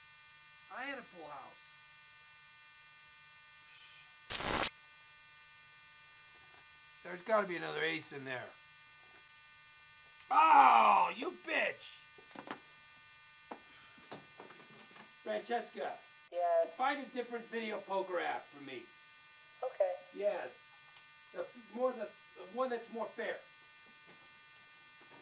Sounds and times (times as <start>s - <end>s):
Speech: 0.7s - 1.7s, 7.0s - 8.6s, 10.3s - 12.0s, 15.3s - 18.9s, 21.4s - 23.5s.